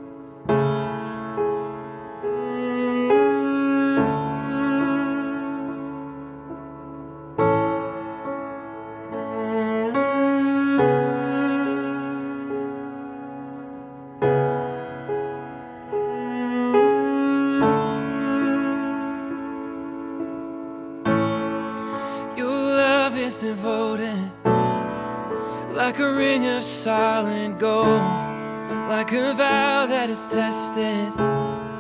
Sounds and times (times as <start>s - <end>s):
Sad music: 0.0s - 31.8s.